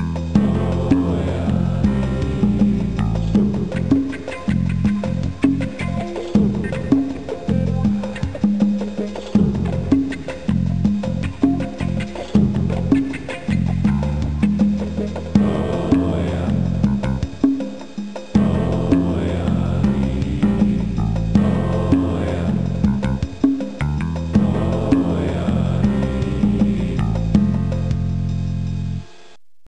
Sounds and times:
Background music: 0:00.0 - 0:29.4.

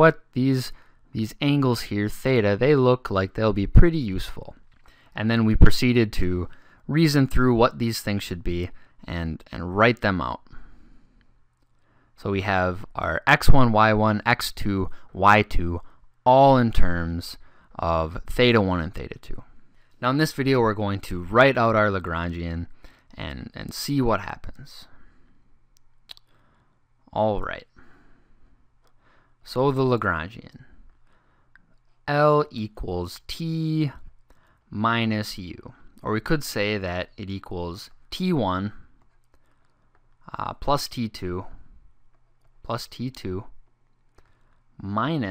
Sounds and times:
Speech: 0:00.0 - 0:04.6, 0:05.2 - 0:10.5, 0:12.2 - 0:25.0, 0:27.1 - 0:27.8, 0:29.4 - 0:30.8, 0:32.0 - 0:34.1, 0:34.7 - 0:38.9, 0:40.3 - 0:41.6, 0:42.6 - 0:43.6, 0:44.8 - 0:45.3.

